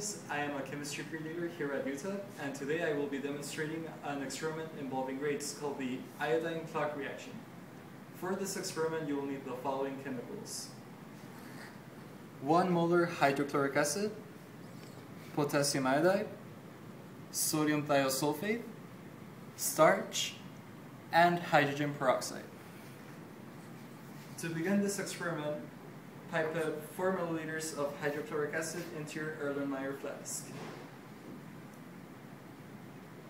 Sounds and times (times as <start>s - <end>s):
Speech: 0.0s - 7.5s, 8.2s - 10.8s, 12.4s - 14.3s, 15.3s - 16.4s, 17.3s - 18.8s, 19.6s - 20.5s, 21.1s - 22.6s, 24.4s - 30.7s.